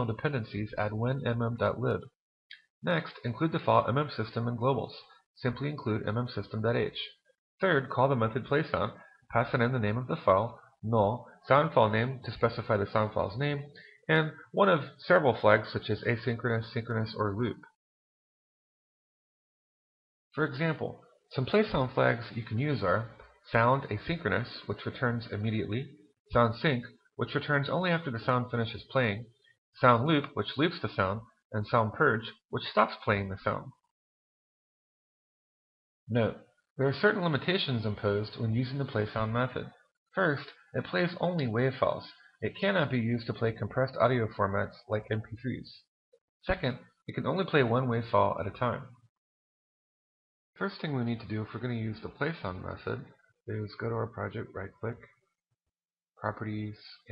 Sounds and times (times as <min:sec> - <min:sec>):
Speech: 0:00.0 - 0:17.8, 0:20.4 - 0:33.9, 0:36.1 - 0:49.0, 0:50.6 - 0:55.2, 0:56.2 - 0:57.1.